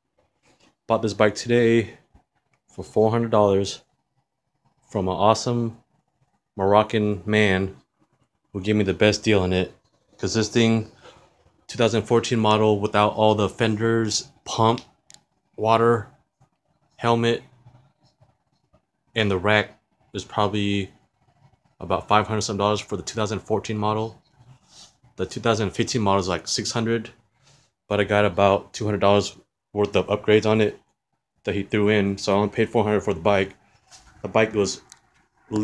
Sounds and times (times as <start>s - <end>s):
Speech: 0.9s - 2.1s, 2.7s - 3.9s, 4.9s - 5.8s, 6.6s - 7.8s, 8.5s - 11.0s, 11.7s - 15.0s, 15.6s - 16.2s, 17.0s - 17.6s, 19.2s - 21.0s, 21.8s - 24.2s, 25.2s - 27.2s, 27.9s - 33.6s, 34.2s - 34.9s.